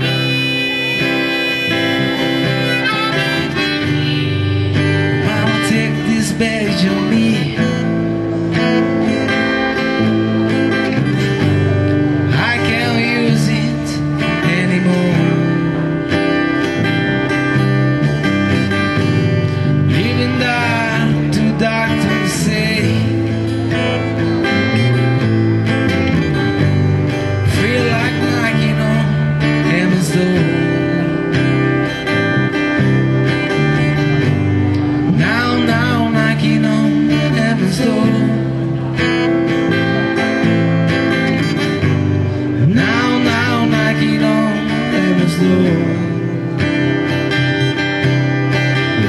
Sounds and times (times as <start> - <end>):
Music: 0.0 - 49.0.